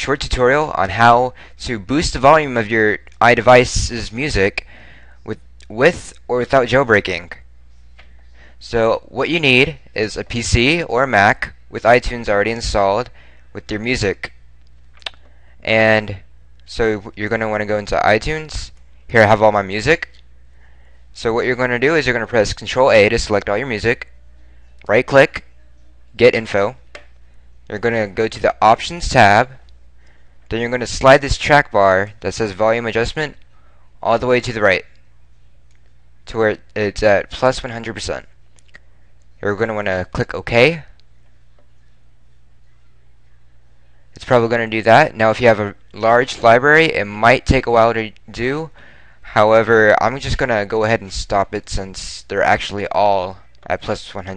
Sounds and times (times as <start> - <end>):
Speech: 0.0 - 7.5, 8.6 - 14.4, 15.0 - 20.2, 21.2 - 26.9, 27.7 - 29.7, 30.5 - 33.4, 34.0 - 35.1, 36.2 - 38.4, 39.4 - 41.0, 44.2 - 54.3.